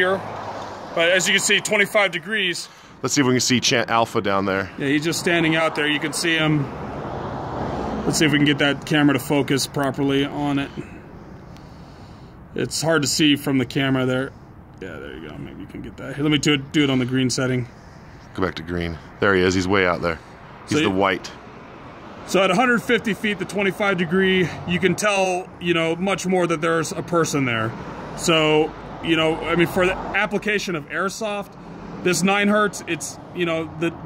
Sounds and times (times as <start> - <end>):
Speech: 0.0 - 0.2, 1.0 - 6.7, 8.1 - 10.9, 12.6 - 17.7, 18.3 - 21.4, 22.3 - 34.0.